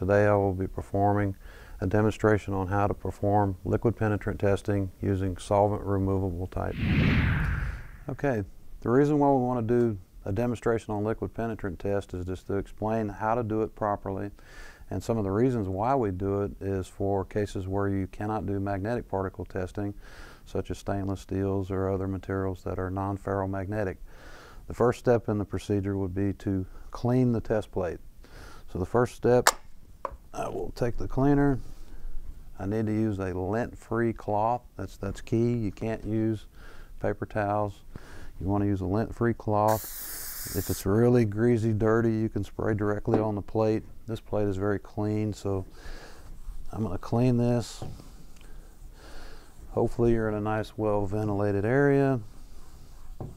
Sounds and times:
Speech: 0.0 - 6.8, 8.1 - 24.0, 24.7 - 28.0, 28.7 - 29.5, 30.4 - 31.6, 32.6 - 39.8, 40.5 - 45.7, 46.7 - 47.9, 49.7 - 52.3.

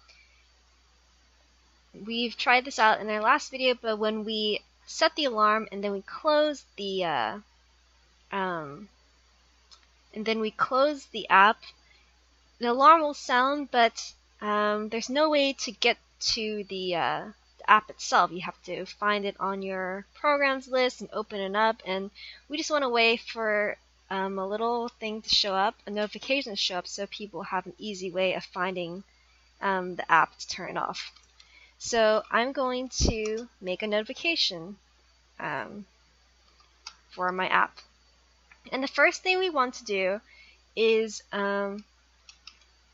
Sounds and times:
Speech: 2.0 - 7.4, 8.4 - 8.9, 10.2 - 11.7, 12.6 - 29.0, 29.6 - 31.1, 31.8 - 34.8, 35.4 - 35.8, 37.1 - 37.8, 38.7 - 40.2, 40.8 - 41.8.

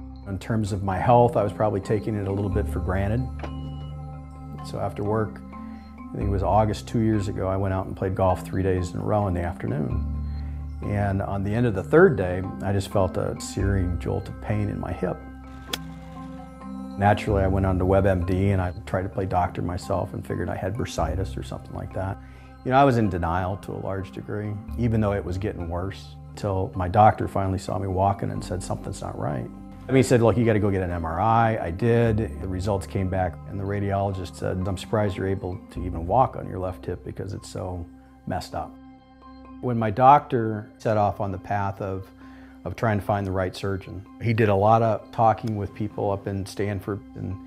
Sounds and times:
Music: 0.0 - 47.4
Speech: 0.3 - 3.3, 4.6 - 5.4, 6.1 - 10.0, 10.8 - 15.2, 17.0 - 38.7, 39.6 - 42.1, 42.7 - 47.4.

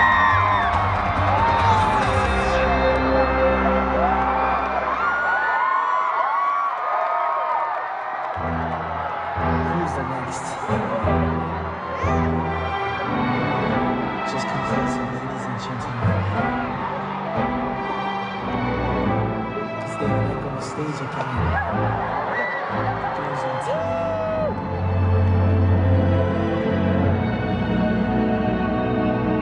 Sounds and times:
Music: 0.0 - 5.8, 8.0 - 29.4
Speech: 9.6 - 11.1, 14.3 - 16.4, 19.8 - 21.8, 23.2 - 24.1.

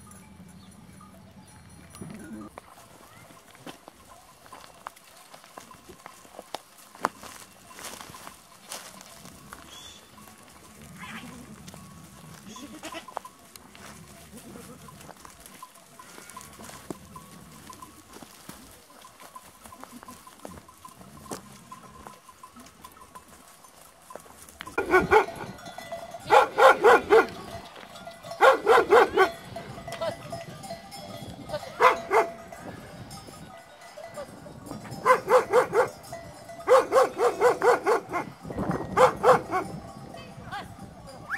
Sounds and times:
Goat: 0.0 - 41.3
Sheep: 0.0 - 41.3.

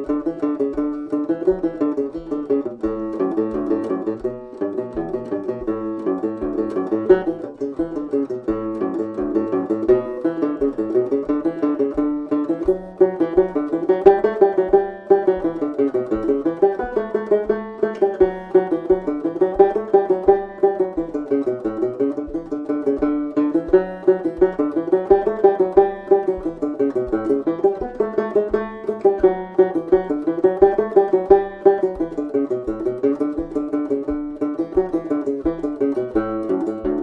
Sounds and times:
Cello: 0.0 - 37.0.

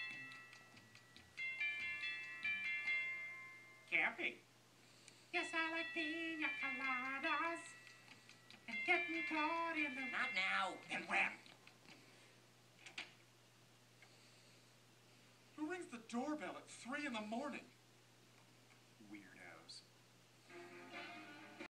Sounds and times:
Music: 0.0 - 3.9, 20.4 - 21.7
Speech: 15.6 - 17.8, 19.0 - 19.9.

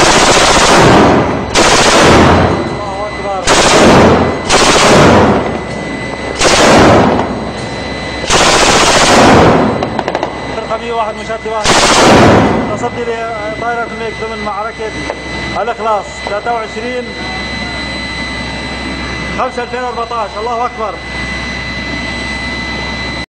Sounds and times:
Outside, urban or manmade: 0.0 - 23.3
Speech: 2.7 - 3.5, 10.6 - 11.7, 12.7 - 15.0, 15.6 - 17.9, 19.4 - 21.0.

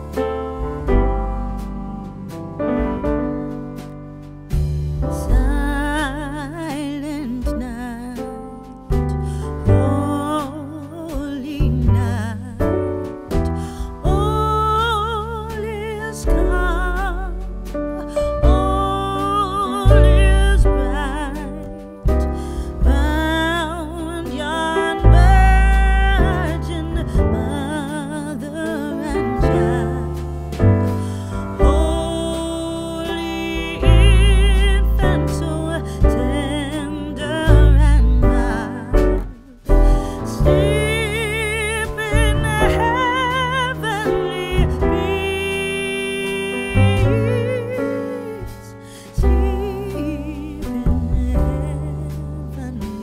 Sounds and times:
Music: 0.0 - 53.0.

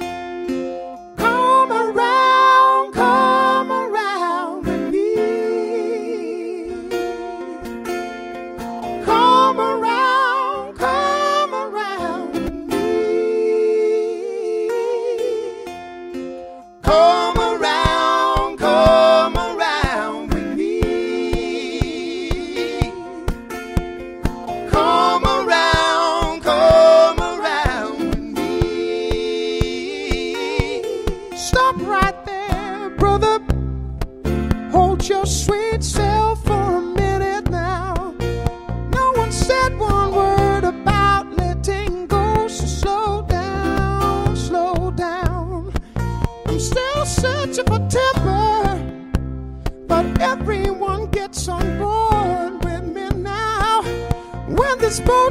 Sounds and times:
Music: 0.0 - 55.3.

